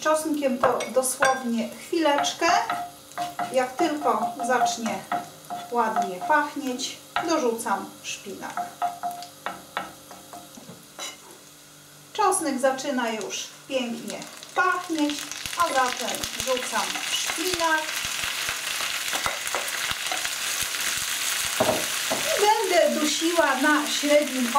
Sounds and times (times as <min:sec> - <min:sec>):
Sizzle: 0:00.0 - 0:24.5.